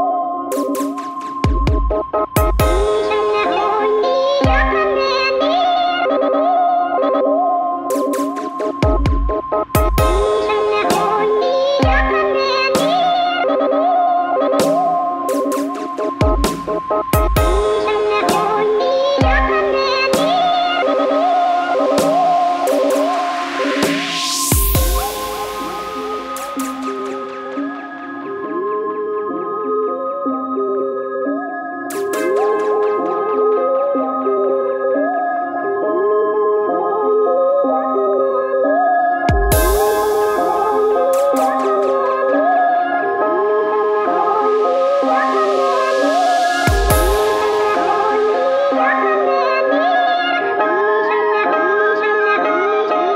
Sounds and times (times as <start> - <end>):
Dubstep: 0.4 - 6.1, 7.8 - 28.6, 31.9 - 33.6, 39.3 - 52.1.